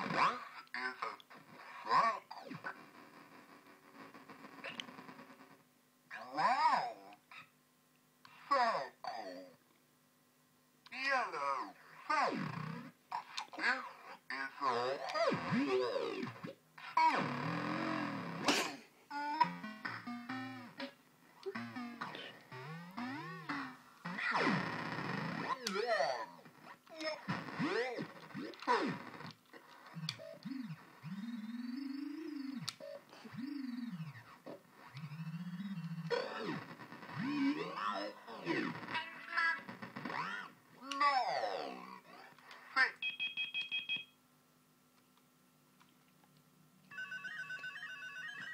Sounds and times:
Inside, small room: 0.0s - 48.5s
Speech: 0.2s - 1.2s, 1.8s - 2.5s, 6.1s - 7.2s, 8.4s - 9.6s, 10.9s - 12.4s, 13.2s - 16.3s, 25.5s - 28.1s, 37.2s - 39.6s, 40.2s - 43.0s.

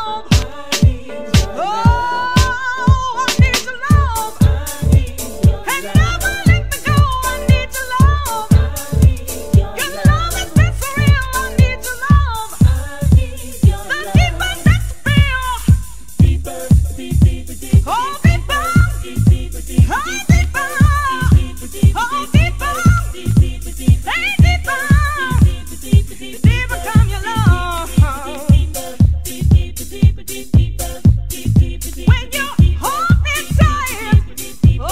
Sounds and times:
Electronic music: 0.0s - 34.9s.

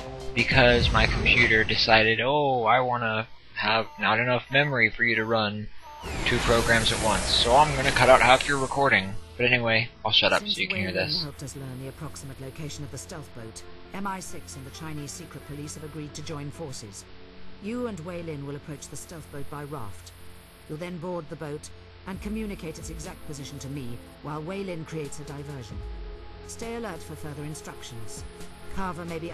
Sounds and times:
Music: 0.0s - 29.3s
Speech: 0.4s - 17.0s, 17.6s - 20.1s, 20.7s - 25.8s, 26.5s - 29.3s.

